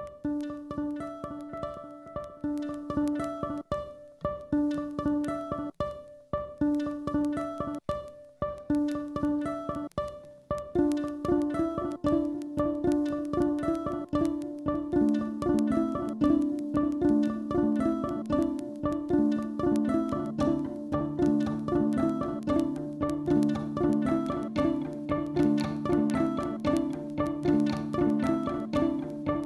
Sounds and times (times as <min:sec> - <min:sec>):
Pizzicato: 0:00.0 - 0:29.4.